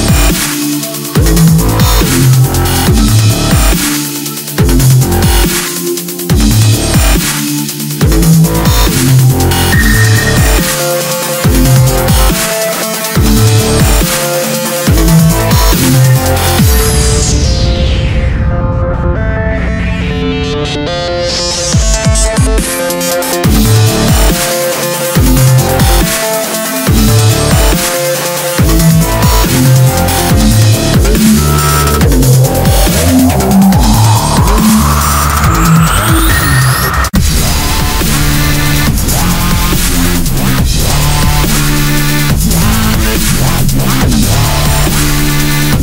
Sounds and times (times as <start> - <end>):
Dubstep: 0.0 - 45.8.